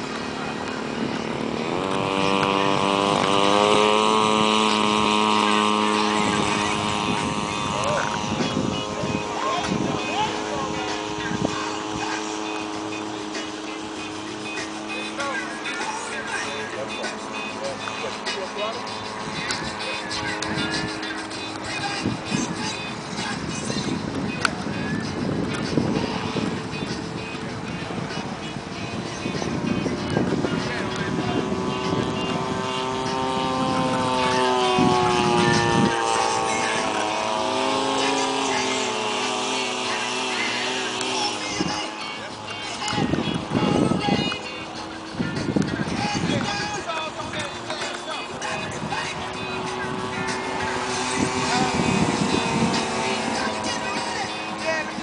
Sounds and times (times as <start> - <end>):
Jet engine: 0.0 - 55.0
Music: 0.0 - 55.0.